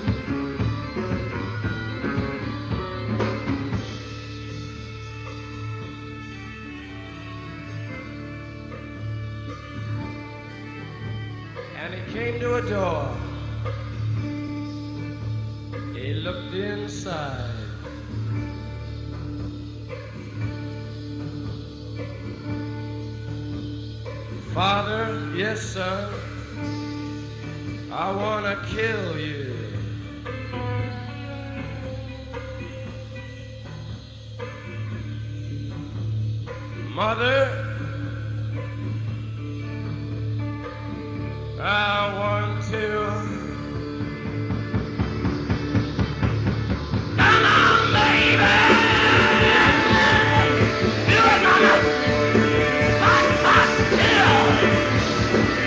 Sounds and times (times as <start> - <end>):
Music: 0.0 - 55.6
Speech: 11.8 - 13.3, 16.0 - 17.7.